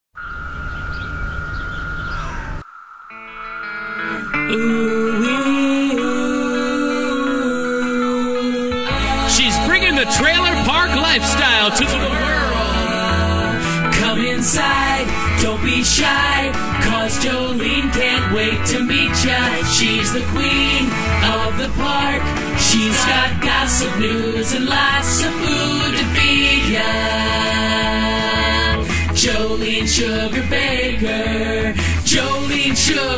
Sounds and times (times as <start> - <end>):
Environmental noise: 0.2 - 6.0
Music: 3.1 - 33.1
Speech: 9.2 - 12.5.